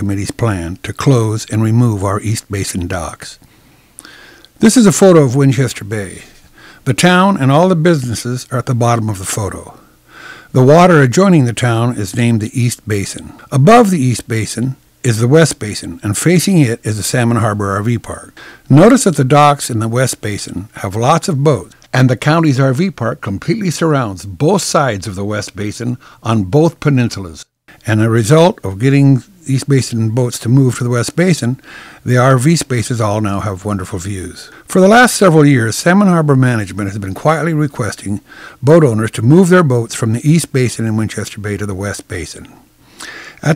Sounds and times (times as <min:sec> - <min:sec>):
Narration, monologue: 0:00.0 - 0:43.5.